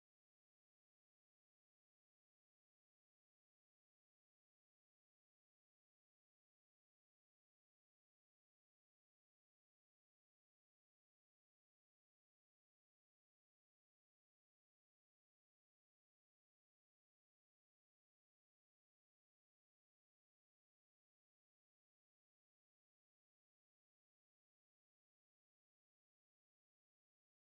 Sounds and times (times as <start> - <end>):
Silence: 0.0 - 27.5.